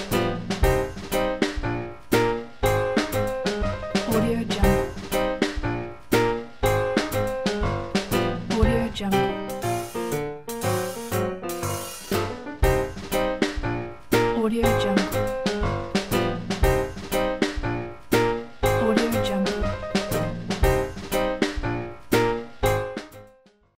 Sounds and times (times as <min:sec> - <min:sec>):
Music: 0:00.0 - 0:23.7
Female speech, woman speaking: 0:04.1 - 0:04.9, 0:08.5 - 0:09.4, 0:14.3 - 0:15.2, 0:18.8 - 0:19.7.